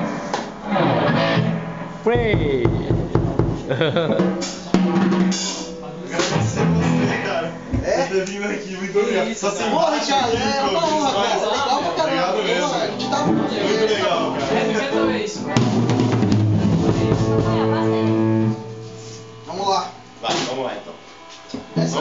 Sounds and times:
Heavy metal: 0.0 - 7.8, 13.0 - 21.1
Drum: 0.0 - 8.2, 13.0 - 22.0
Drum kit: 0.0 - 8.2, 12.9 - 22.0
Guitar: 0.0 - 22.0
Speech: 2.1 - 3.4, 4.6 - 15.8, 19.5 - 21.0, 21.8 - 22.0.

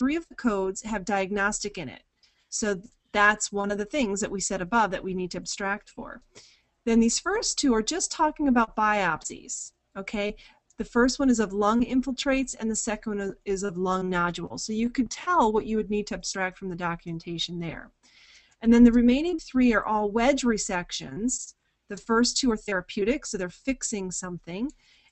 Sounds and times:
Narration, monologue: 0.0 - 25.1.

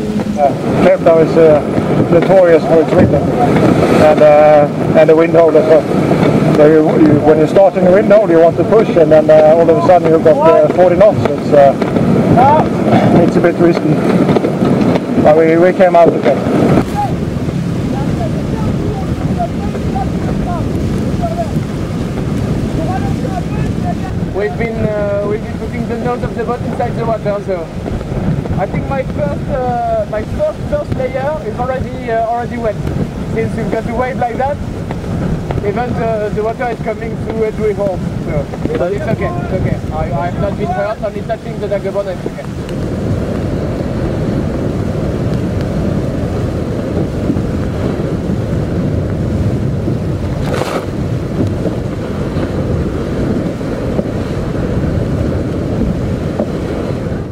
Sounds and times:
Outside, rural or natural: 0.0 - 57.3.

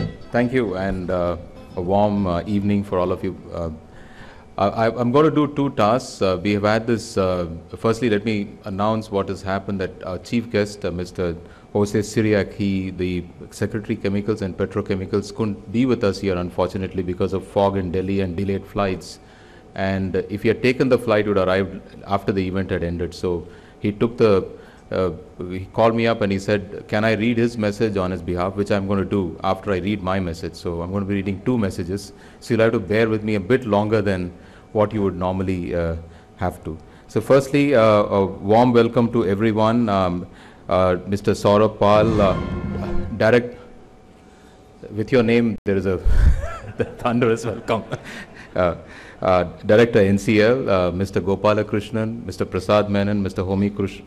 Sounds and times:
Male speech, man speaking: 0.0 - 3.8, 4.6 - 19.2, 19.8 - 43.6, 44.8 - 46.0, 47.0 - 48.0, 48.6 - 54.0
Narration, monologue: 0.0 - 54.0.

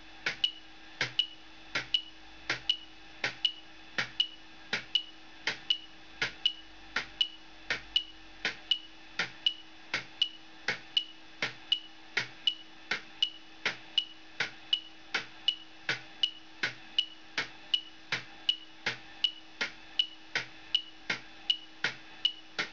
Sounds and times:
Tick-tock: 0.2 - 22.7.

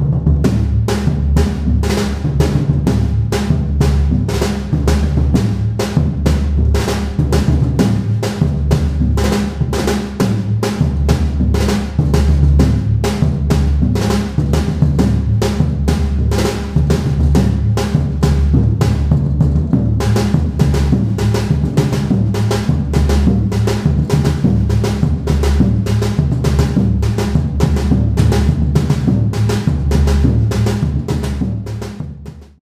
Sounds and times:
Percussion: 0.0 - 32.4.

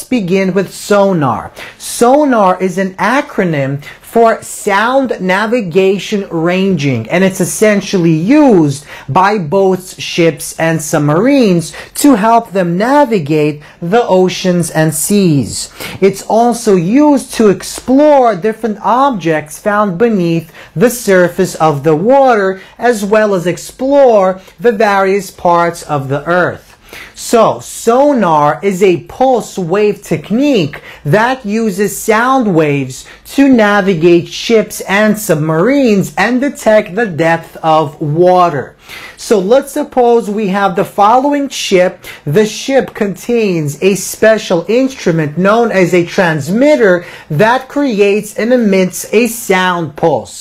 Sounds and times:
Speech: 0.0 - 50.4.

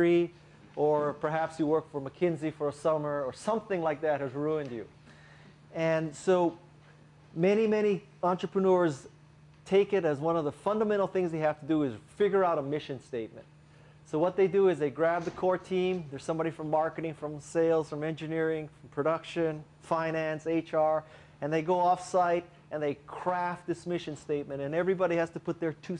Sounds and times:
Speech: 0.0 - 4.9, 5.7 - 6.6, 7.4 - 13.5, 14.1 - 25.9.

